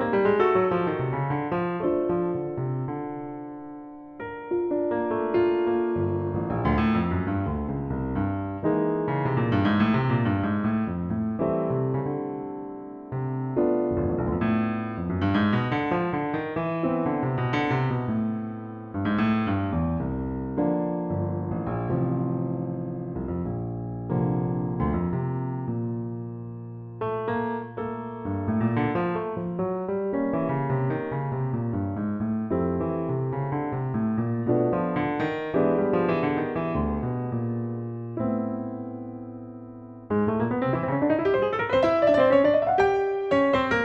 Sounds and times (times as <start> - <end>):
Electric piano: 0.0 - 43.8.